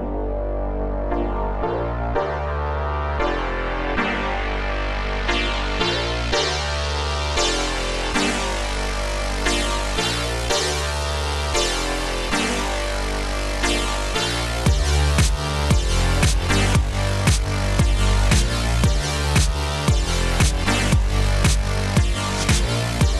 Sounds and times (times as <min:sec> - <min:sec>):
Music: 0:00.0 - 0:23.1.